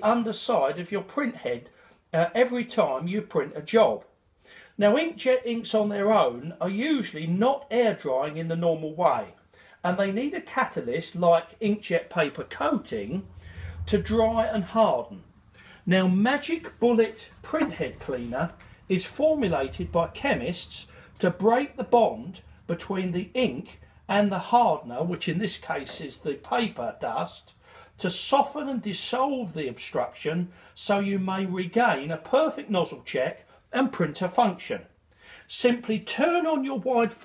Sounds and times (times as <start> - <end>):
Speech: 0.0 - 4.1, 4.8 - 37.2.